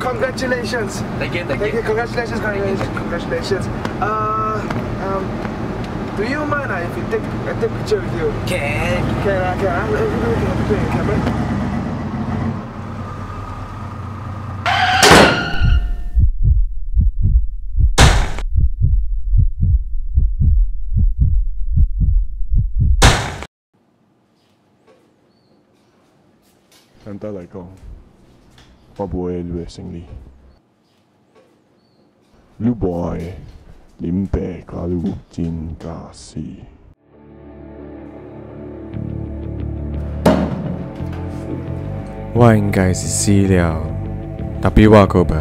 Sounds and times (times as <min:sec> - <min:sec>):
Heart sounds, heartbeat: 0:15.6 - 0:23.0.